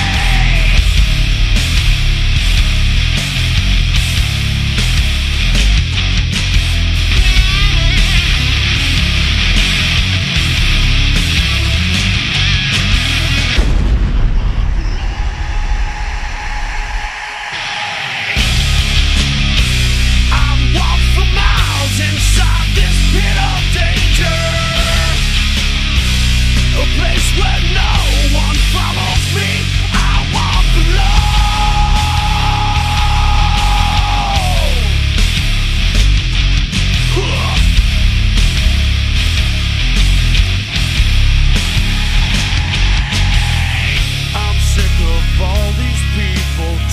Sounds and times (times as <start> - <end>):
Music: 0.0 - 46.9.